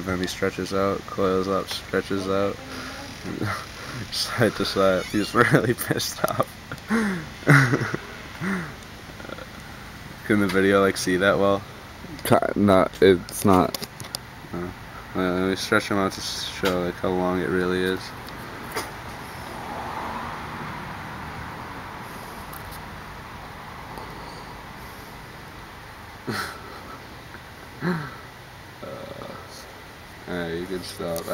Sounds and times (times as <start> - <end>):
Speech: 0.0 - 6.5, 10.2 - 13.8, 14.5 - 18.2, 30.3 - 31.3.